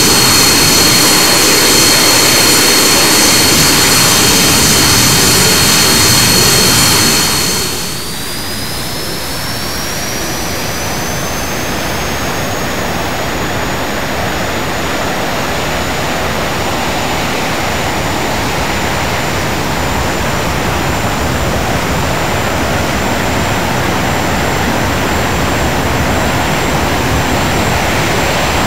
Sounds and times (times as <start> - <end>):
Fixed-wing aircraft, airplane: 0.0 - 28.6
Jet engine: 0.0 - 28.6
Propeller, airscrew: 0.0 - 28.6.